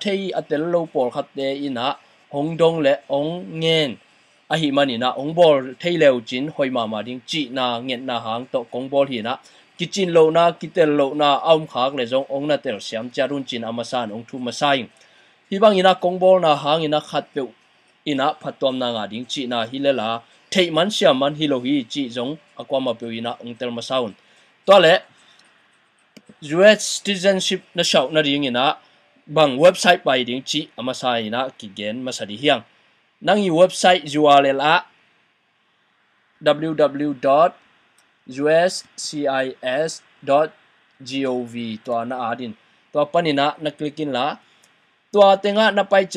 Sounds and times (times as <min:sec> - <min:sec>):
Speech: 0:00.0 - 0:25.1, 0:26.2 - 0:34.9, 0:36.4 - 0:37.6, 0:38.3 - 0:44.4, 0:45.2 - 0:46.1.